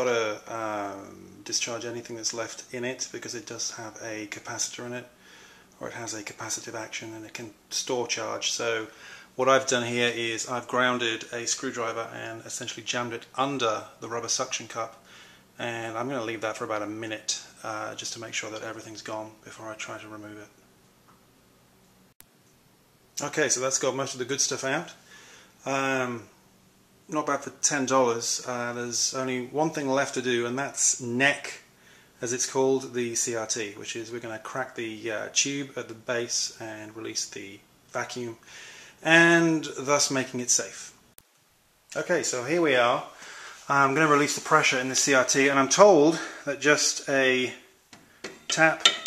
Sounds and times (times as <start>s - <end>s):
Speech: 0.0s - 5.2s, 5.8s - 20.6s, 23.2s - 25.0s, 25.6s - 26.4s, 27.1s - 41.0s, 41.9s - 47.7s, 48.5s - 49.0s
Inside, small room: 0.0s - 49.0s.